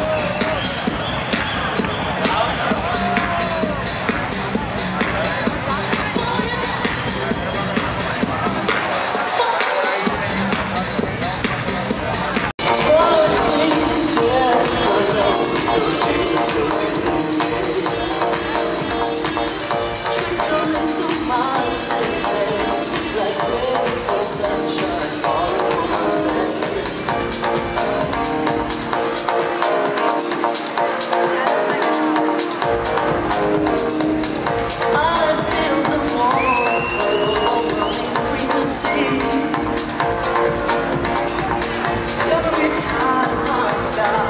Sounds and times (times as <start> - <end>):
Music: 0.0 - 44.3.